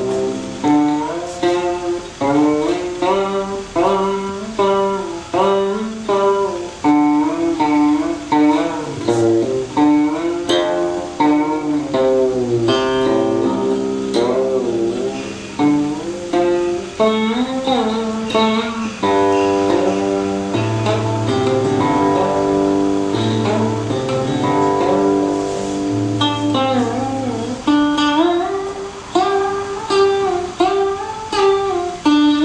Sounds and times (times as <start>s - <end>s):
Folk music: 0.0s - 32.4s.